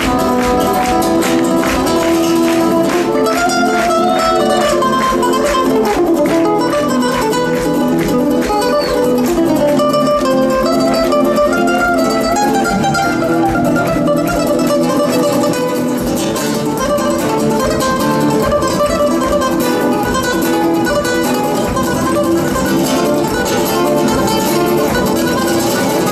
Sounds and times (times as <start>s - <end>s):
Flamenco: 0.0s - 26.1s
Guitar: 0.0s - 26.1s.